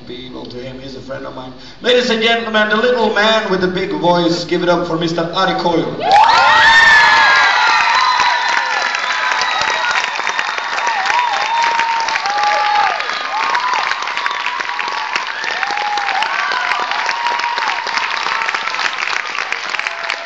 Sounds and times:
Speech: 0.0s - 6.0s.

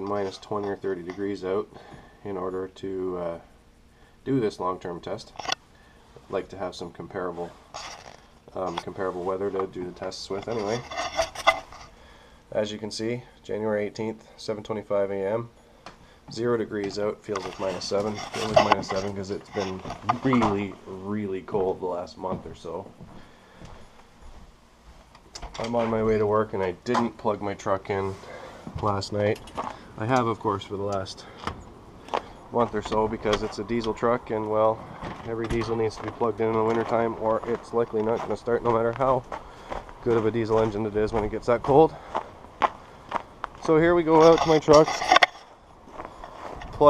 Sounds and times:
Speech: 0.0s - 3.5s, 4.3s - 5.4s, 6.3s - 7.6s, 8.5s - 10.9s, 12.5s - 15.5s, 16.3s - 22.9s, 25.4s - 29.4s, 30.0s - 31.3s, 32.5s - 39.3s, 40.0s - 42.0s, 43.6s - 45.0s.

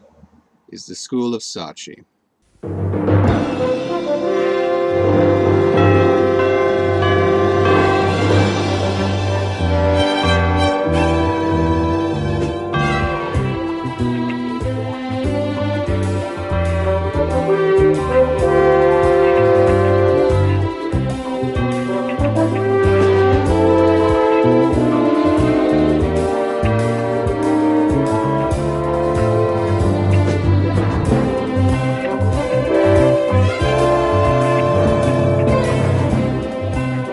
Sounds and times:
Timpani: 2.5s - 37.1s.

